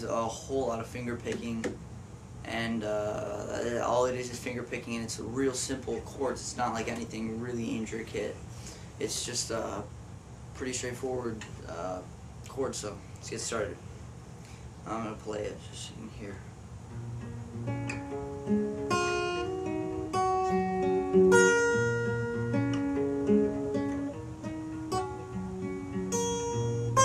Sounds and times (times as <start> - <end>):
Speech: 0.0 - 1.8, 2.4 - 8.4, 9.0 - 9.9, 10.6 - 13.8, 14.8 - 16.5.